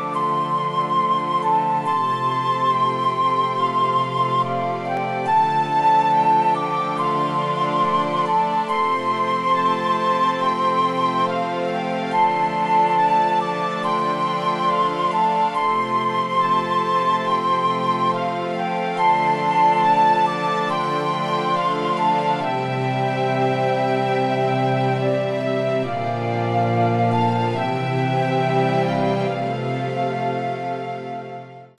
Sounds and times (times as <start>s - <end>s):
Music: 0.0s - 31.8s.